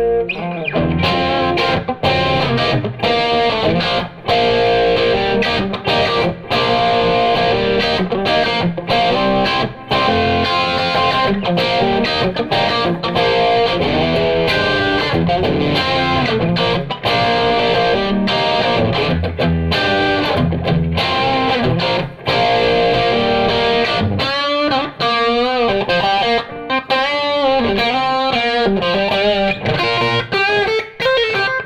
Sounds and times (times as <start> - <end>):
Effects unit: 0.0 - 31.6
Guitar: 0.0 - 31.6.